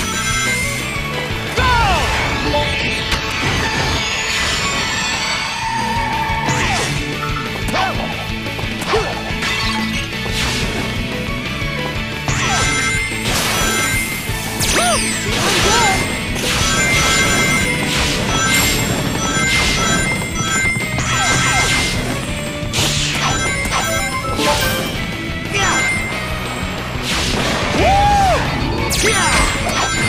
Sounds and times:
Music: 0:00.0 - 0:30.0.

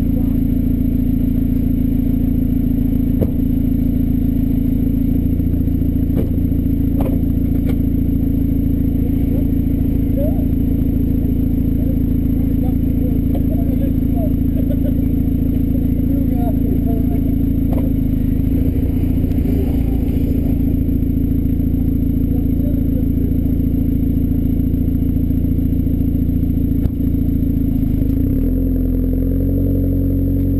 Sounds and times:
Speech: 0:00.0 - 0:00.5, 0:09.0 - 0:10.5, 0:11.8 - 0:14.7, 0:15.7 - 0:17.4, 0:22.2 - 0:23.4.

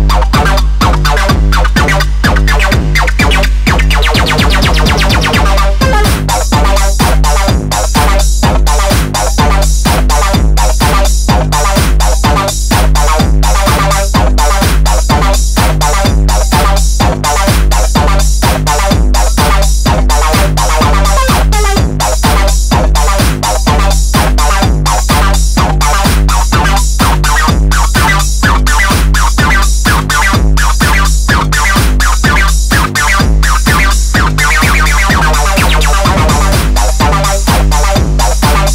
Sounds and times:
Music: 0:00.0 - 0:38.7.

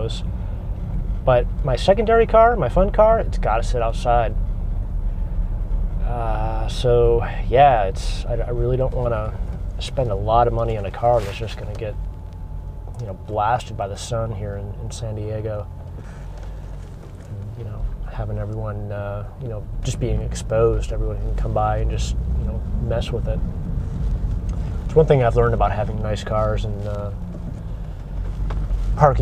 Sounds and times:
Car: 0:00.0 - 0:29.2.

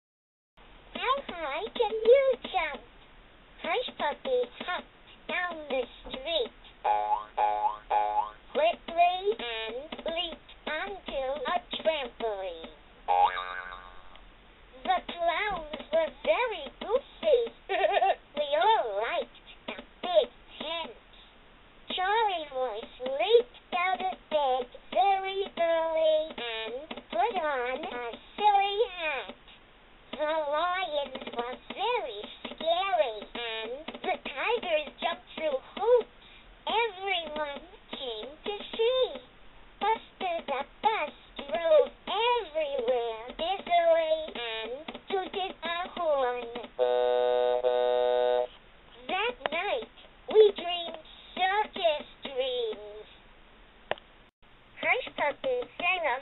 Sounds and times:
Speech: 0:01.0 - 0:02.9, 0:03.6 - 0:06.6, 0:08.6 - 0:12.8, 0:14.8 - 0:21.2, 0:21.9 - 0:29.5, 0:30.1 - 0:46.8, 0:49.0 - 0:53.2, 0:54.8 - 0:56.2.

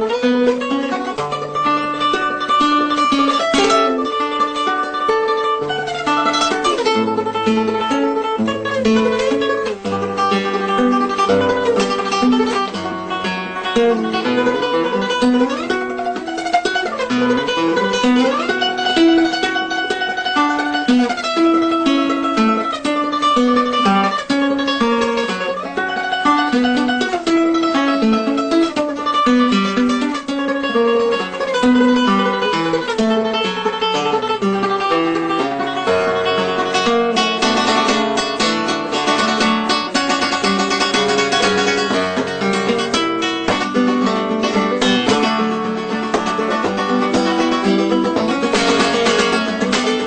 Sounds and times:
Acoustic guitar: 0:00.0 - 0:50.0
Ukulele: 0:00.0 - 0:50.0.

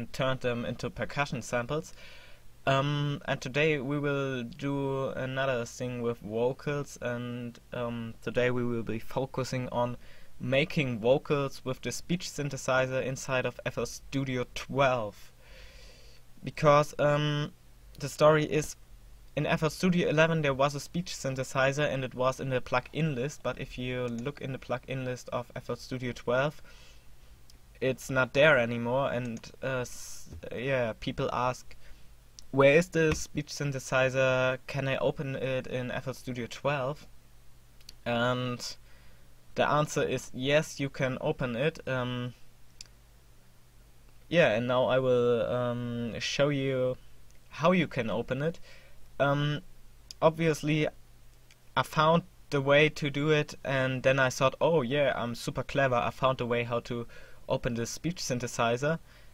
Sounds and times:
Male speech, man speaking: 0:00.0 - 0:01.9, 0:02.7 - 0:15.3, 0:16.4 - 0:18.8, 0:19.4 - 0:26.6, 0:27.8 - 0:31.7, 0:32.5 - 0:37.1, 0:38.0 - 0:38.8, 0:39.6 - 0:42.4, 0:44.3 - 0:48.6, 0:49.2 - 0:49.6, 0:50.2 - 0:51.0, 0:51.8 - 0:59.0
Narration, monologue: 0:00.0 - 0:59.3.

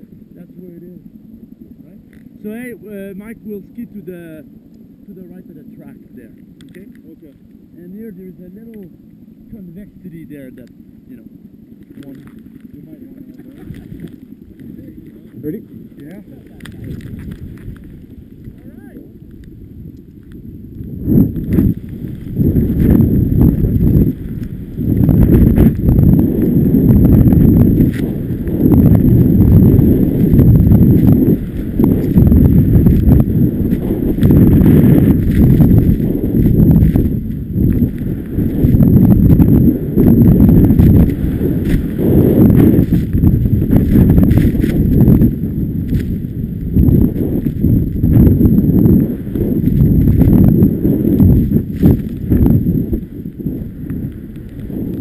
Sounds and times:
Speech: 0:01.8 - 0:04.5, 0:05.1 - 0:08.9, 0:18.6 - 0:19.0.

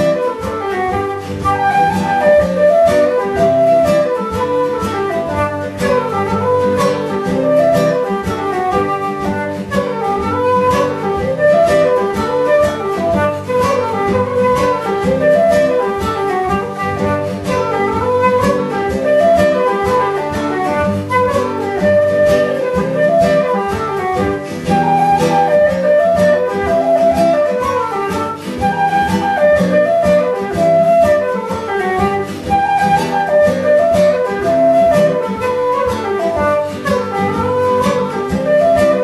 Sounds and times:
Acoustic guitar: 0:00.0 - 0:39.0.

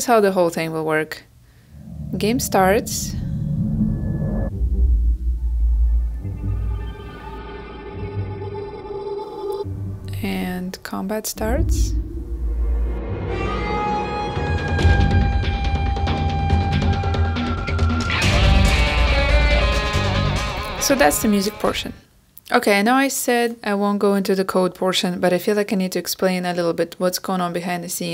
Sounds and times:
Speech: 0:00.0 - 0:01.3, 0:02.2 - 0:03.2, 0:10.1 - 0:12.0, 0:20.8 - 0:28.1
Music: 0:04.5 - 0:10.4, 0:11.4 - 0:22.0.

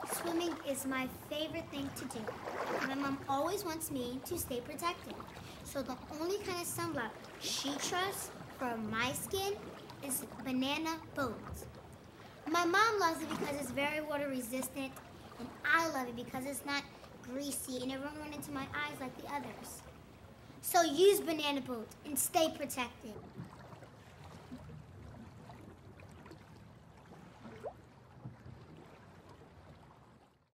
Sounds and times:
Speech: 0:00.0 - 0:02.3, 0:02.9 - 0:11.6, 0:12.5 - 0:19.8, 0:20.6 - 0:23.2.

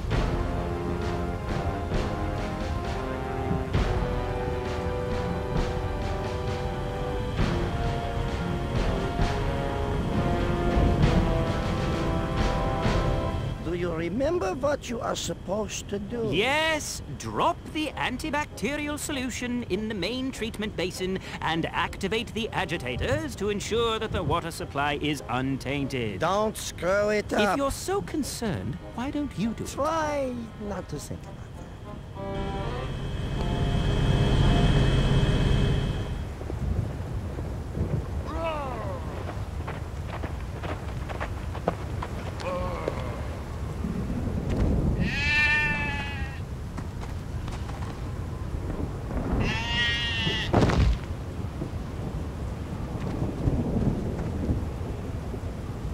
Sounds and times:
Music: 0:00.0 - 0:14.6, 0:16.6 - 0:36.3
Speech: 0:13.6 - 0:31.4.

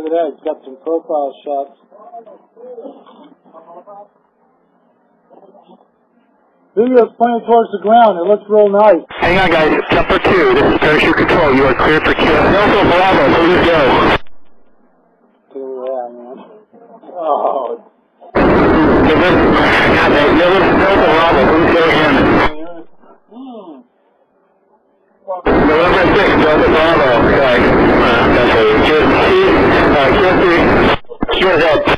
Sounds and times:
Speech: 0:00.0 - 0:14.2, 0:15.5 - 0:23.9, 0:25.2 - 0:31.9.

